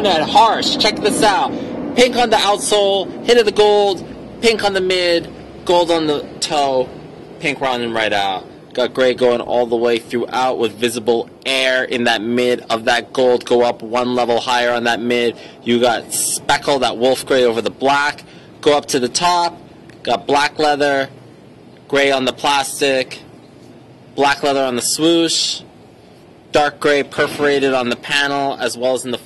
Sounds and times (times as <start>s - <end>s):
Speech: 0.0s - 21.1s, 21.9s - 23.3s, 24.2s - 25.7s, 26.5s - 29.2s.